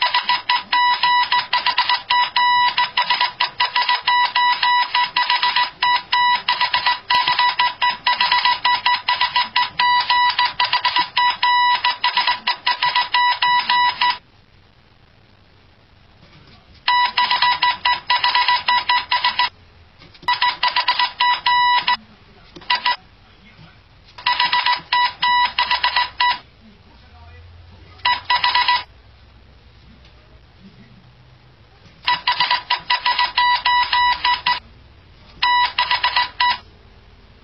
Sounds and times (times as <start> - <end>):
Inside, small room: 0.0 - 37.4.